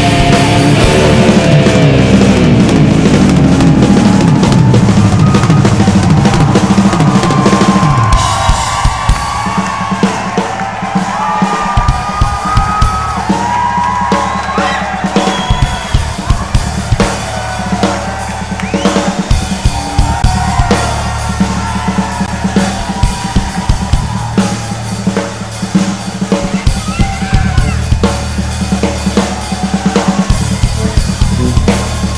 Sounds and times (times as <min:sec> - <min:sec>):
Drum: 0:00.0 - 0:32.1
Drum kit: 0:00.0 - 0:32.1.